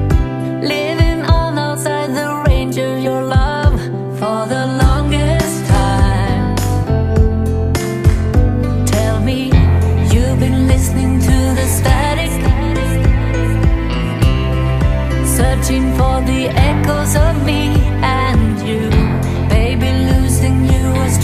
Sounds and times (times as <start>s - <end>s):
Music: 0.0s - 21.2s.